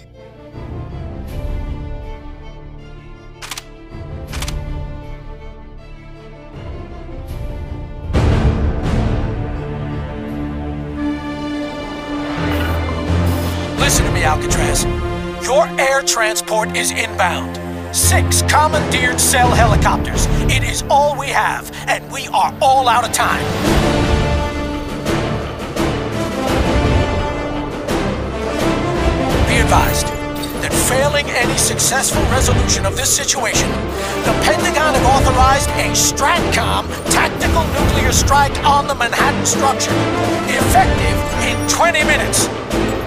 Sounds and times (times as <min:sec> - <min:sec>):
Music: 0:00.0 - 0:43.0
Speech: 0:13.8 - 0:23.5, 0:29.4 - 0:42.5.